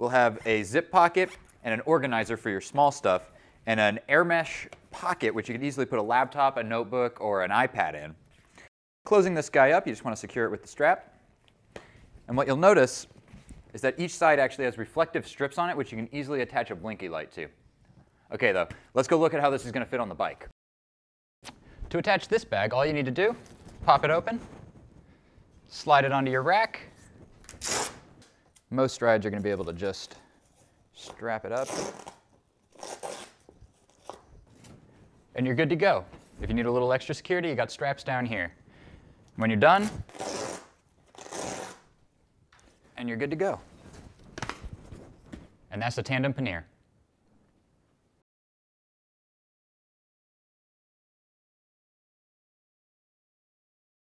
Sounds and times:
Speech: 0.0 - 8.2, 9.1 - 11.1, 12.3 - 13.1, 13.7 - 17.6, 18.3 - 20.5, 21.9 - 24.5, 25.7 - 26.9, 28.7 - 30.2, 31.0 - 31.8, 35.4 - 38.6, 39.4 - 40.0, 43.0 - 43.7, 45.7 - 46.8.

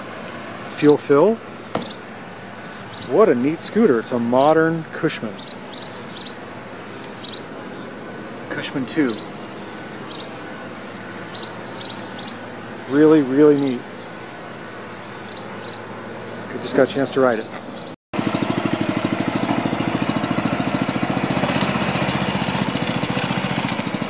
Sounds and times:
Motorcycle: 17.8 - 24.1.

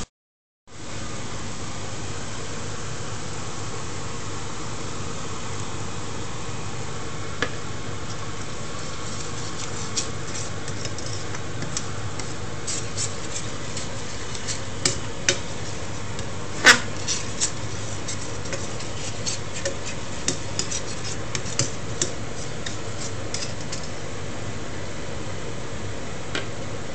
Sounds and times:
Stir: 8.0 - 24.1.

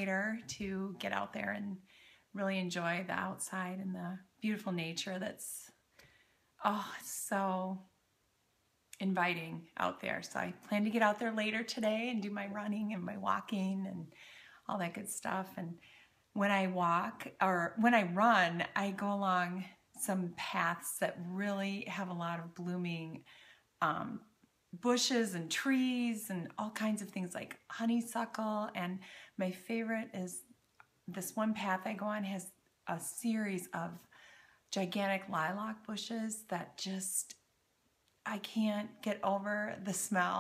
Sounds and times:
Speech: 0.0 - 1.8, 2.4 - 5.8, 6.6 - 7.9, 9.0 - 14.1, 14.7 - 15.8, 16.4 - 23.2, 23.8 - 30.4, 31.1 - 34.0, 34.7 - 37.4, 38.3 - 40.4.

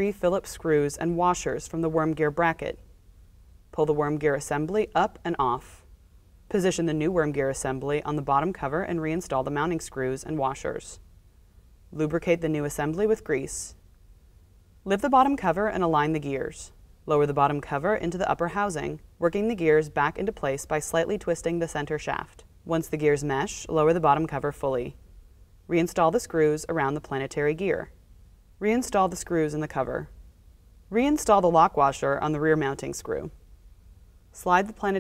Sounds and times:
Speech: 0.0 - 2.8, 3.7 - 5.9, 6.5 - 11.0, 12.0 - 13.8, 14.9 - 25.0, 25.7 - 27.9, 28.6 - 30.1, 30.9 - 33.4, 34.4 - 35.0.

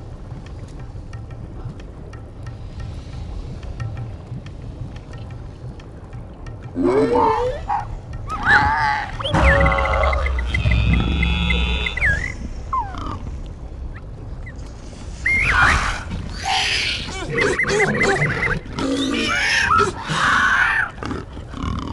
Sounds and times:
Music: 0.0 - 21.9.

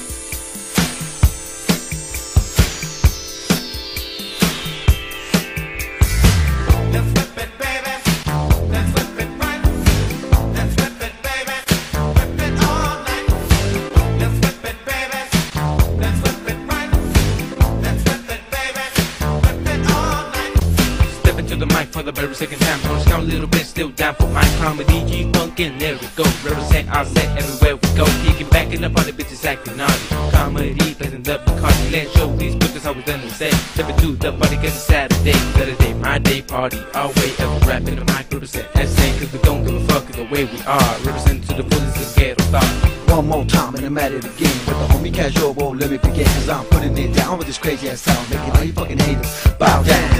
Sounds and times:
Music: 0.0 - 50.1.

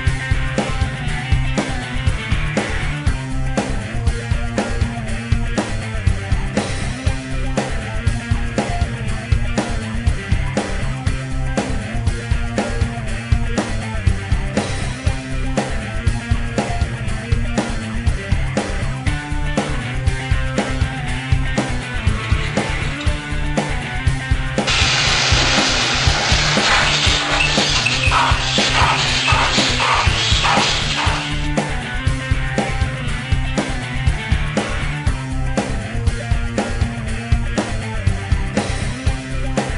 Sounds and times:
Music: 0.0 - 39.7.

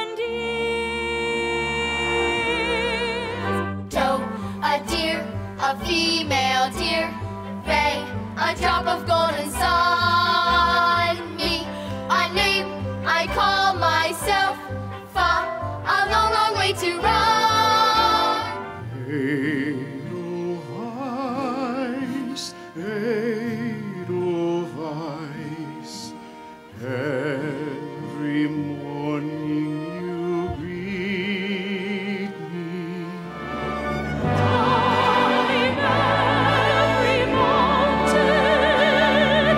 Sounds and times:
Tender music: 0.0 - 39.5.

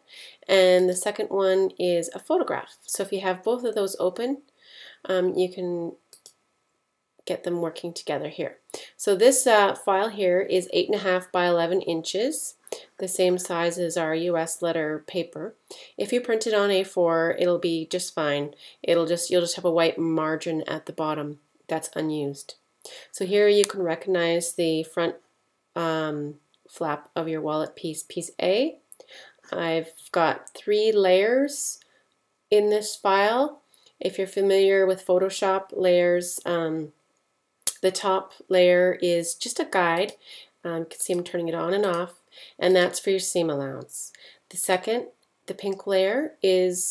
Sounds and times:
Speech: 0.5 - 4.4, 5.1 - 6.3, 7.3 - 25.2, 25.8 - 28.8, 29.5 - 31.8, 32.5 - 37.0, 37.7 - 46.9.

